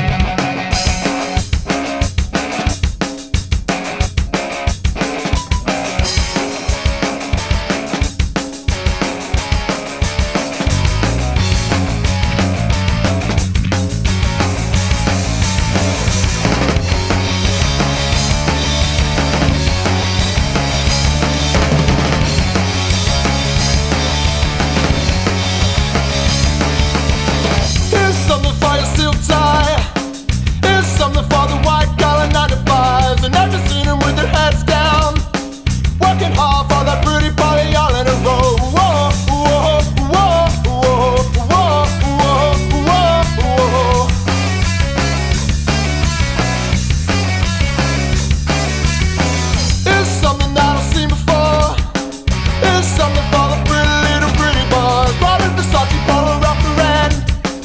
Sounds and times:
Music: 0.0 - 57.6.

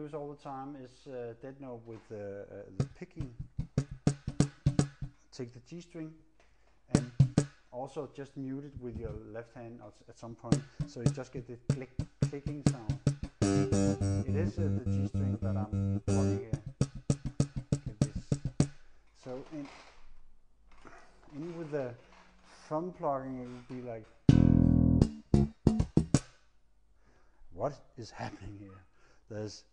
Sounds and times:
Speech: 0.0 - 3.4, 5.3 - 6.2, 6.9 - 7.1, 7.8 - 13.0, 14.2 - 16.6, 17.9 - 18.3, 19.2 - 19.8, 21.3 - 22.0, 22.6 - 24.1, 27.5 - 29.7
Bass guitar: 2.8 - 5.1, 7.0 - 7.5, 8.8 - 9.2, 10.5 - 18.7, 24.3 - 26.2.

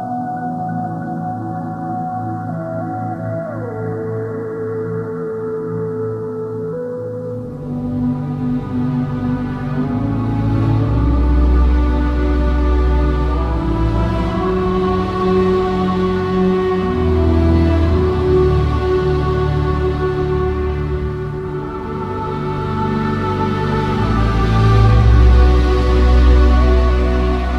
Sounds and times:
Music: 0.0 - 27.5.

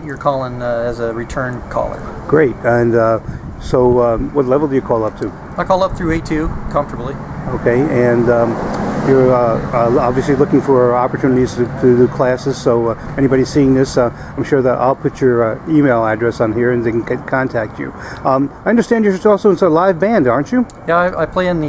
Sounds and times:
Outside, urban or manmade: 0.0 - 21.6
Speech: 0.0 - 21.6.

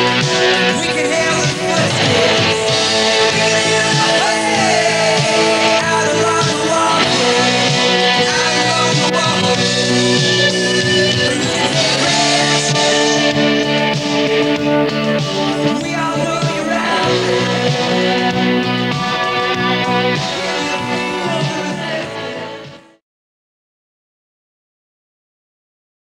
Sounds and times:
Music: 0.0 - 23.0.

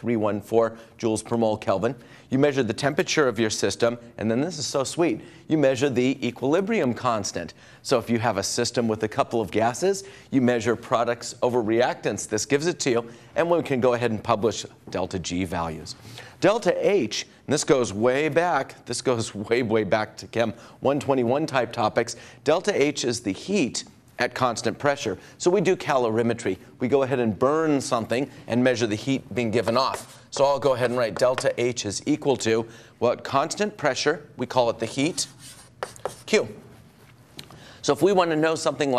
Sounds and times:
Speech: 0.0 - 35.4, 36.1 - 36.7, 37.8 - 38.9.

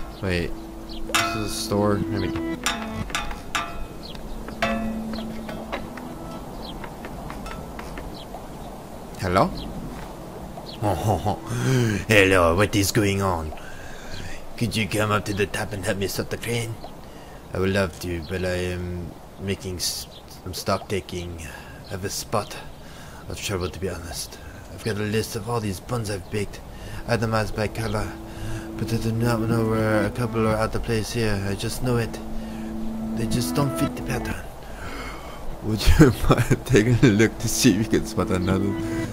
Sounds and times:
Speech: 0.2 - 0.5, 1.4 - 2.4, 9.2 - 9.6, 10.8 - 13.6, 14.2 - 16.8, 17.5 - 22.7, 23.3 - 32.2, 33.2 - 34.5, 35.6 - 38.8.

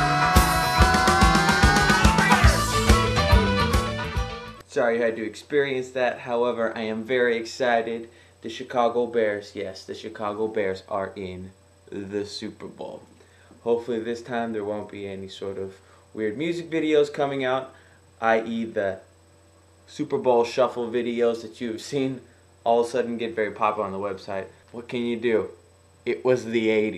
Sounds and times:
Music: 0.0 - 4.6
Speech: 4.7 - 19.1, 19.9 - 26.9.

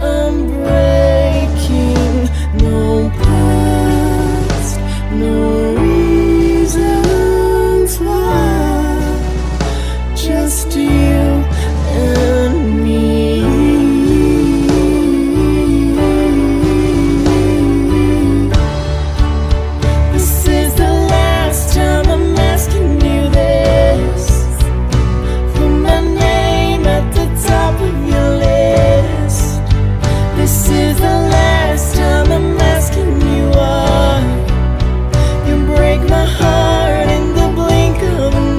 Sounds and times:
Music: 0.0 - 38.5.

